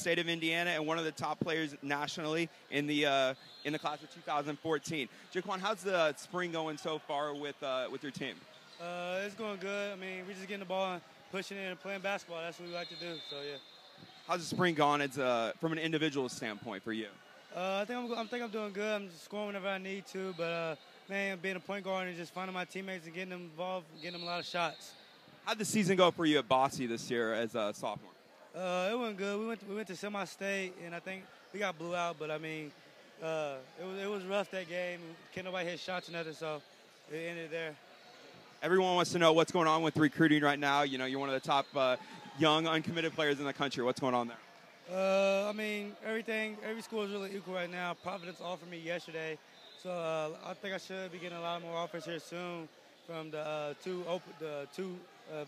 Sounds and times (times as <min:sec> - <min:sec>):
Speech: 0:00.0 - 0:13.6, 0:14.3 - 0:24.9, 0:25.5 - 0:37.8, 0:38.6 - 0:55.4.